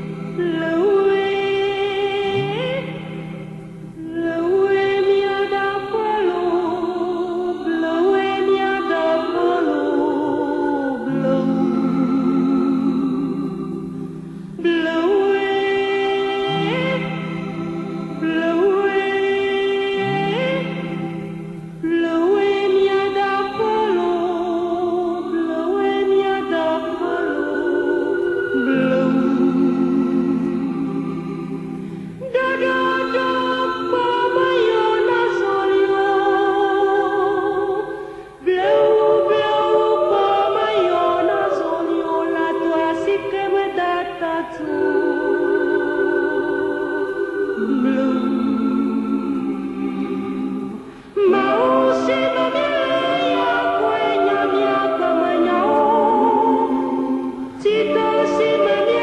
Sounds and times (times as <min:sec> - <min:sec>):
Opera: 0:00.0 - 0:59.0.